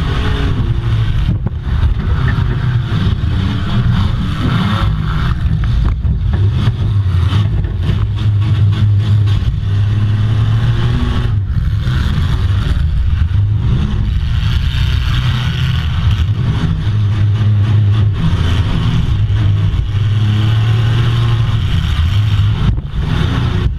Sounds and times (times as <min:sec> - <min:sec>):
Car: 0:00.0 - 0:23.7.